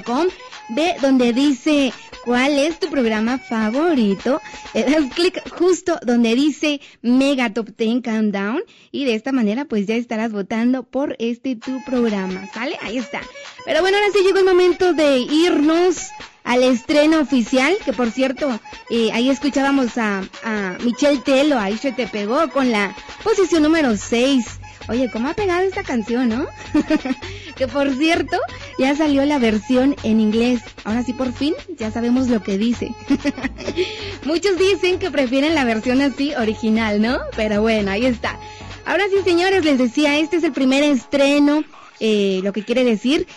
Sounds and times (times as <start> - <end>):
Music: 0.0 - 7.6, 11.0 - 43.3
Speech: 0.0 - 33.4, 34.2 - 43.3.